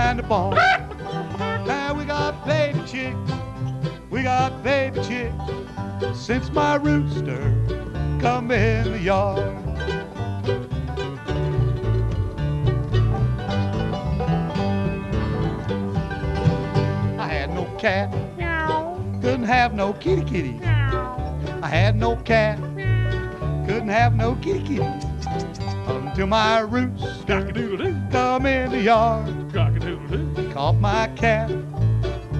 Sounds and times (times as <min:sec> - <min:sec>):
Music: 0:00.0 - 0:32.3.